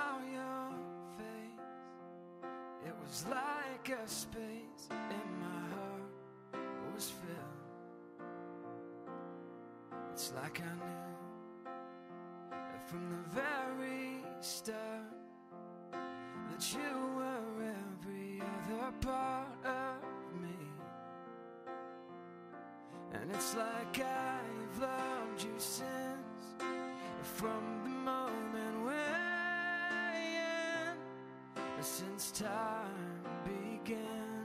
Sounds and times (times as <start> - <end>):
Music: 0.0 - 34.4.